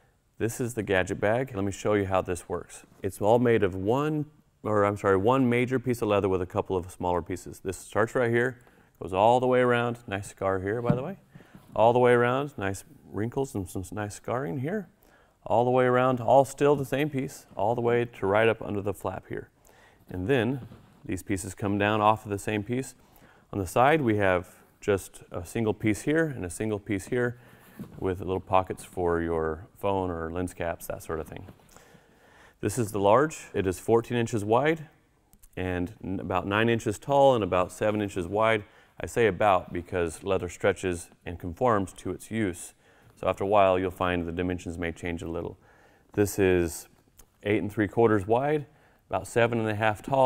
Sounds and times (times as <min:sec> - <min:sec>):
Speech: 0:00.4 - 0:19.5, 0:20.1 - 0:31.6, 0:32.6 - 0:50.2.